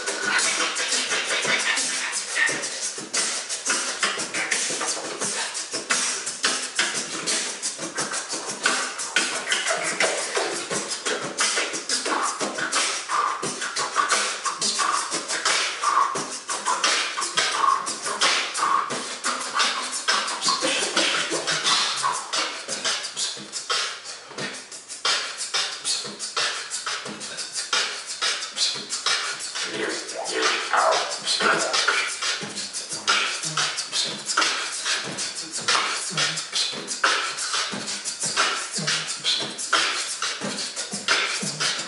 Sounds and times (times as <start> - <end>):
Beatboxing: 0.0 - 41.8
Inside, large room or hall: 0.0 - 41.8.